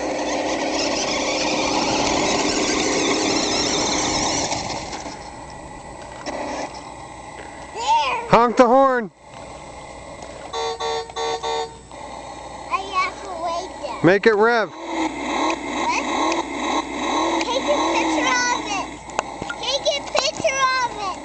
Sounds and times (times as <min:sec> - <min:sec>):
Truck: 0:00.0 - 0:07.5, 0:09.3 - 0:13.9, 0:14.7 - 0:21.2.